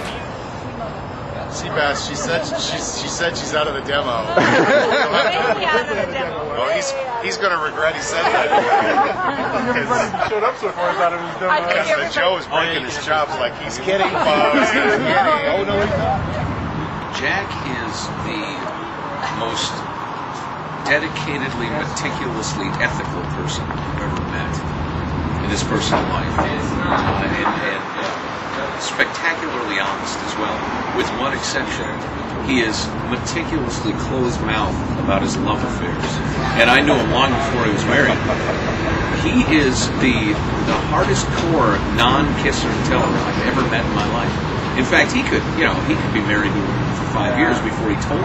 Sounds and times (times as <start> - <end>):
Speech: 1.4 - 16.4, 17.1 - 19.8, 20.9 - 24.6, 25.4 - 38.3, 39.2 - 48.2.